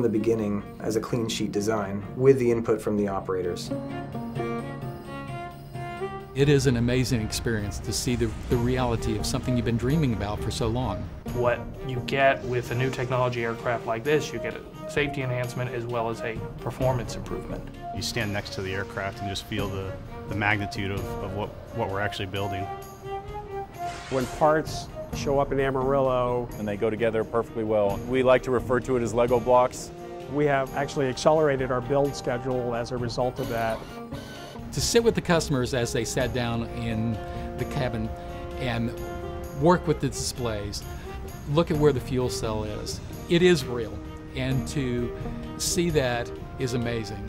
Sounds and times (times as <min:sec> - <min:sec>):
Speech: 0:00.0 - 0:03.7, 0:06.4 - 0:22.7, 0:24.1 - 0:33.8, 0:34.7 - 0:39.0, 0:39.6 - 0:40.8, 0:41.5 - 0:47.2.